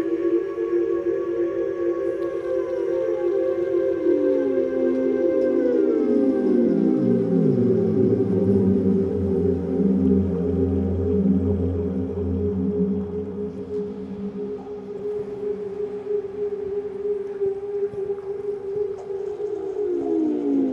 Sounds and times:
Music: 0:00.0 - 0:20.7
Whale vocalization: 0:00.0 - 0:20.7.

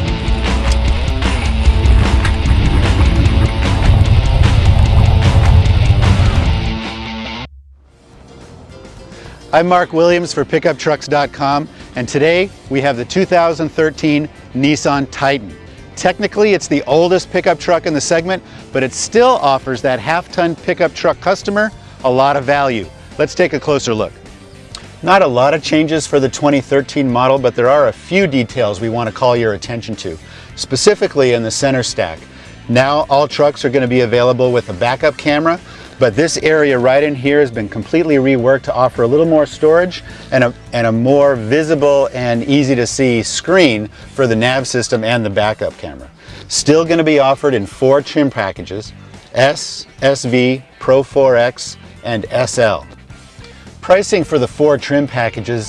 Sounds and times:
Music: 0:00.0 - 0:55.6
Speech: 0:09.5 - 0:24.2, 0:25.0 - 0:52.9, 0:53.8 - 0:55.6.

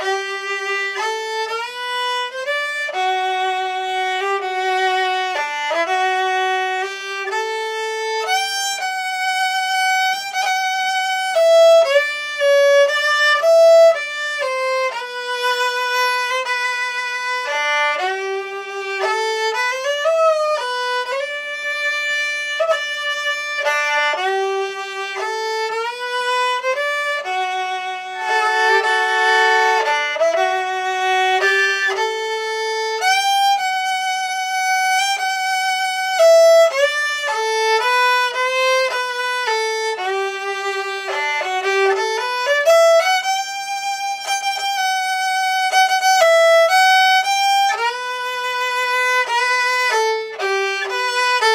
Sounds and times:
Violin, fiddle: 0:00.0 - 0:51.5.

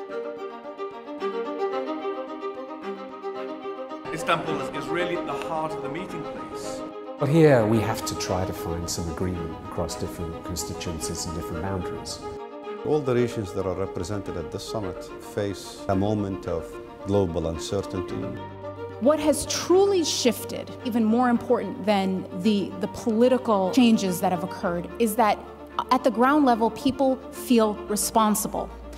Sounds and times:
Music: 0:00.0 - 0:28.9.

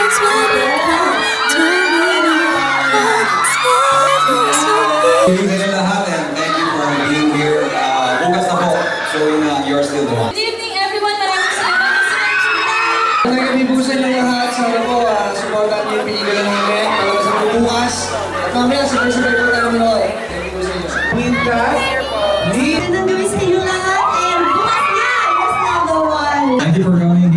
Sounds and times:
Children shouting: 0:00.0 - 0:10.4, 0:11.2 - 0:13.3, 0:16.0 - 0:26.2
Cheering: 0:00.0 - 0:27.2
Crowd: 0:00.0 - 0:27.3.

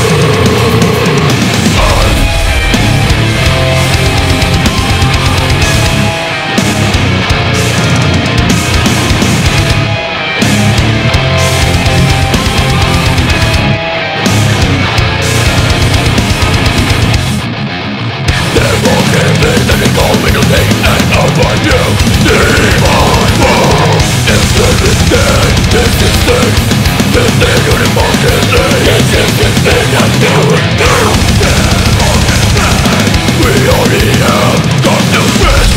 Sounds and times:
Music: 0:00.0 - 0:35.7.

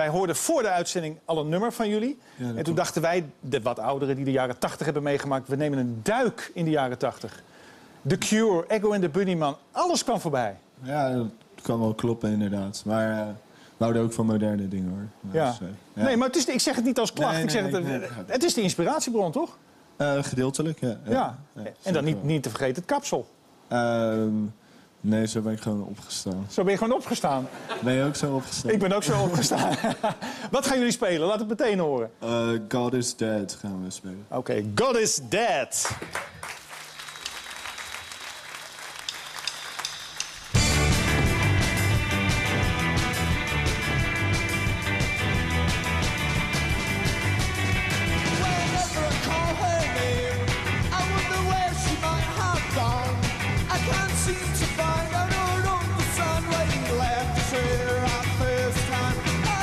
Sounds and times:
Speech: 0:08.1 - 0:29.6.

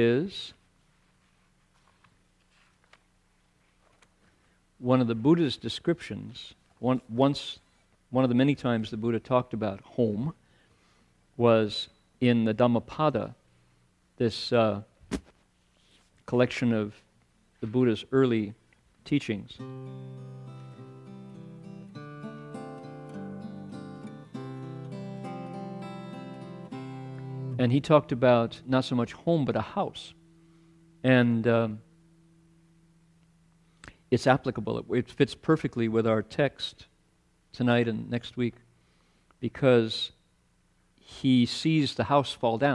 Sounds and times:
Speech: 0:00.0 - 0:00.6, 0:04.8 - 0:10.4, 0:11.4 - 0:13.4, 0:14.2 - 0:15.0, 0:16.3 - 0:19.6, 0:27.6 - 0:30.2, 0:31.0 - 0:31.8, 0:34.1 - 0:38.7, 0:39.4 - 0:40.2, 0:41.0 - 0:42.7
Music: 0:19.6 - 0:29.0.

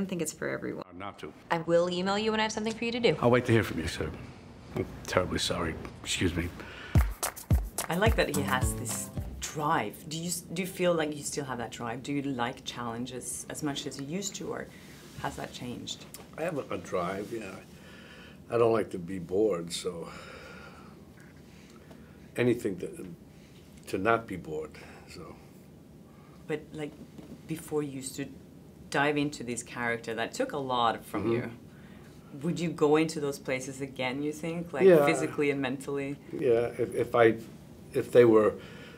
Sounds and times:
Music: 0:06.9 - 0:09.6.

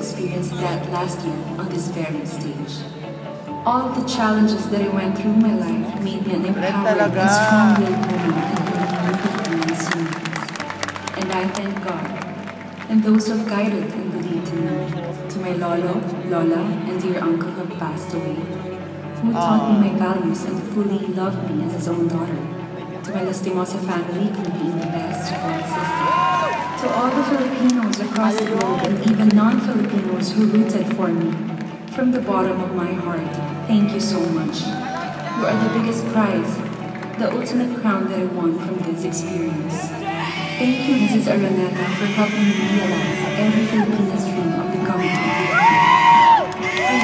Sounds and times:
Speech: 0:00.0 - 0:02.9, 0:03.7 - 0:10.4, 0:11.2 - 0:12.2, 0:12.9 - 0:26.1, 0:26.8 - 0:36.6, 0:37.2 - 0:45.7
Music: 0:00.0 - 0:47.0.

